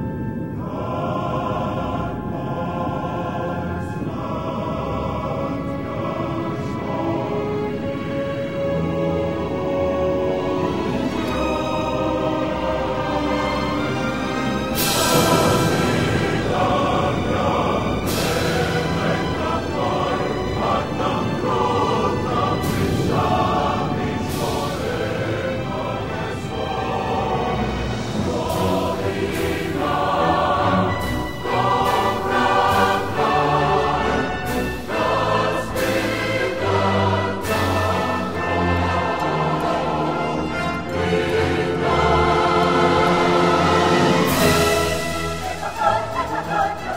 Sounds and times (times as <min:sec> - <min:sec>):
Theme music: 0:00.0 - 0:46.9.